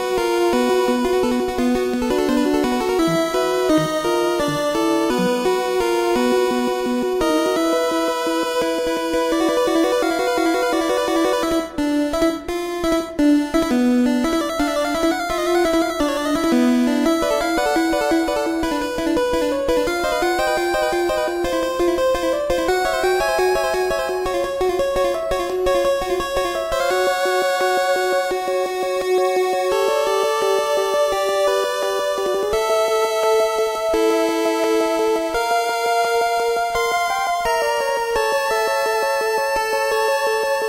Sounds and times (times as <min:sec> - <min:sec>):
Video game music: 0:00.0 - 0:40.6.